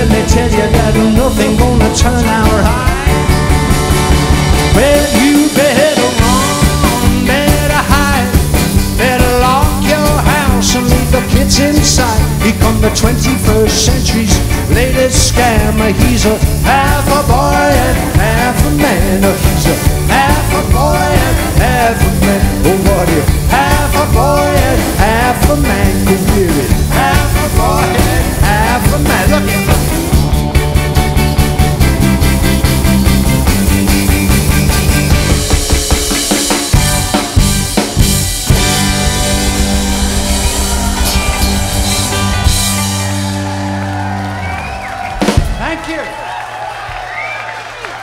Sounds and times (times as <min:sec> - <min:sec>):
Music: 0:00.0 - 0:48.0
Singing: 0:09.0 - 0:30.0.